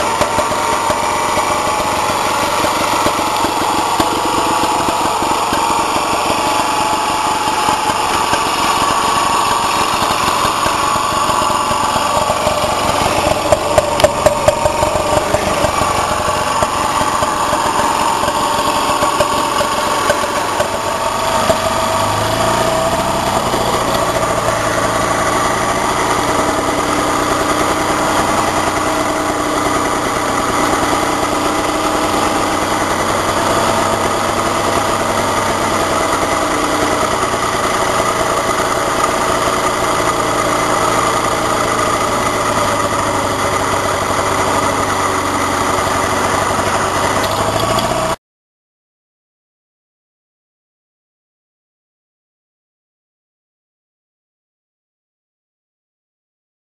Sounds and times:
Vehicle: 0.0 - 48.2.

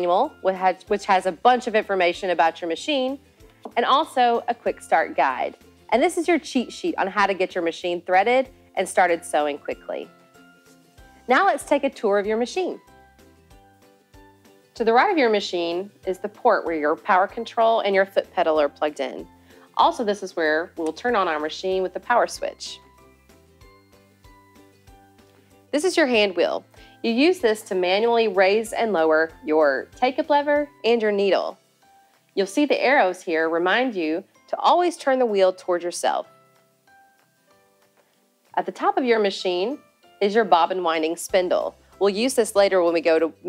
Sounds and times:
Speech: 0.0 - 10.1, 11.3 - 12.8, 14.8 - 19.2, 19.8 - 22.8, 25.8 - 31.6, 32.4 - 36.3, 38.6 - 43.4
Music: 0.0 - 43.4.

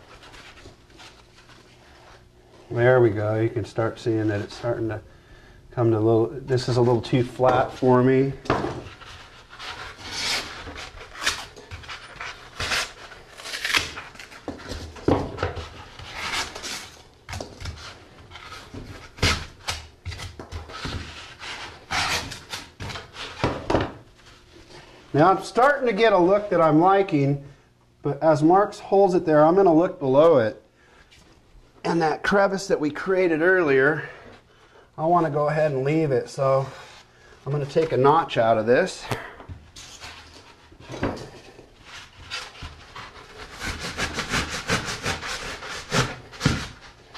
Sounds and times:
Speech: 2.7 - 5.0, 5.8 - 8.4, 25.1 - 30.6, 31.8 - 34.2, 35.0 - 36.8, 37.4 - 39.3.

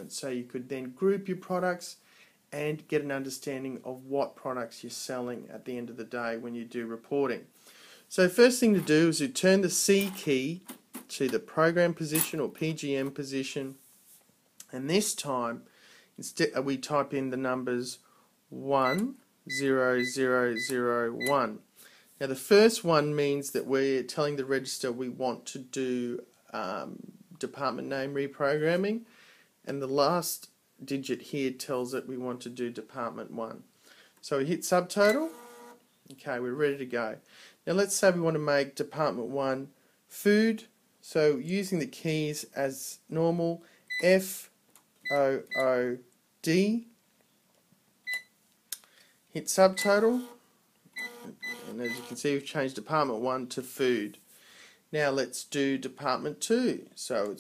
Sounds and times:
Speech: 0.0 - 7.5, 8.1 - 13.8, 14.6 - 29.1, 29.7 - 35.3, 36.1 - 47.0, 49.4 - 50.3, 51.7 - 54.2, 54.9 - 57.4
Cash register: 35.1 - 35.8, 51.0 - 52.2.

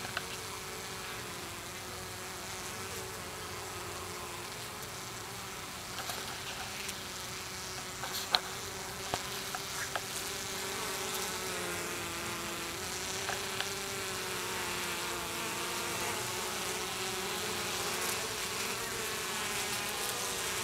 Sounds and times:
Bee, wasp, etc.: 0.0 - 20.6.

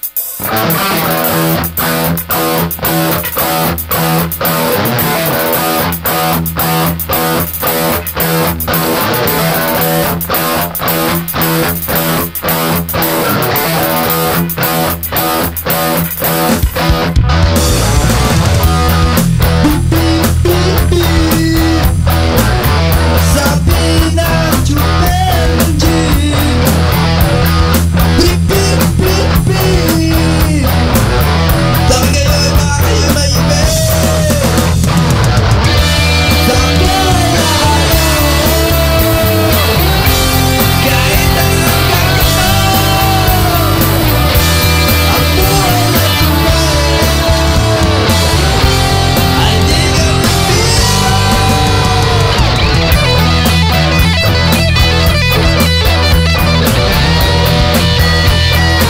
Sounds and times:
Music: 0.0 - 58.8.

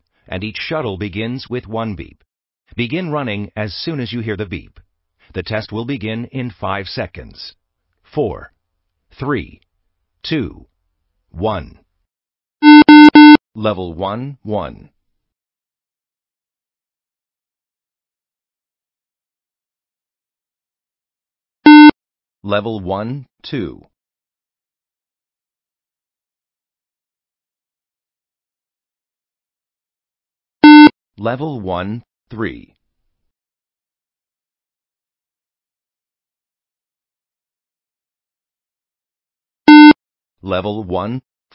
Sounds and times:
Speech: 0.2 - 10.7, 11.3 - 11.9, 13.6 - 15.0, 22.4 - 24.0, 31.2 - 32.8, 40.4 - 41.3
Beep, bleep: 12.6 - 13.4, 21.7 - 22.0, 30.6 - 30.9, 39.7 - 40.0.

